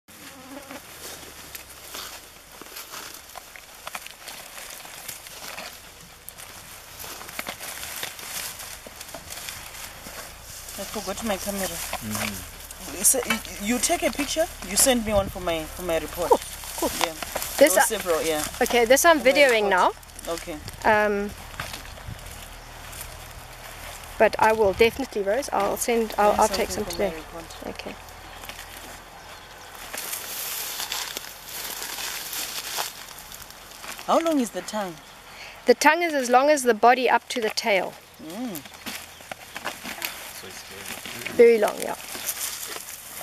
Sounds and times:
Fly, housefly: 0.1 - 0.9
Bee, wasp, etc.: 0.1 - 1.3, 10.7 - 21.7.

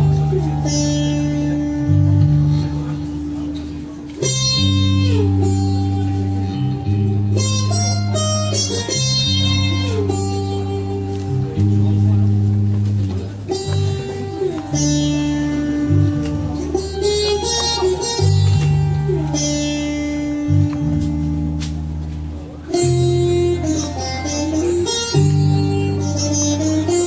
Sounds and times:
Music: 0.0 - 27.0
Speech: 0.0 - 27.0.

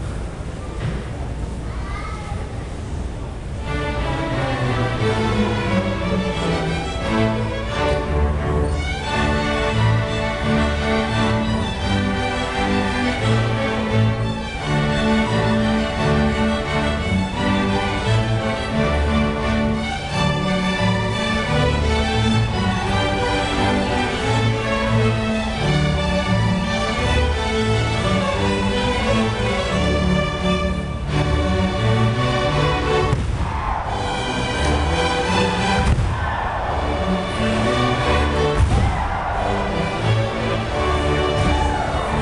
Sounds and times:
Orchestra: 3.0 - 42.2
Violin, fiddle: 3.7 - 33.0.

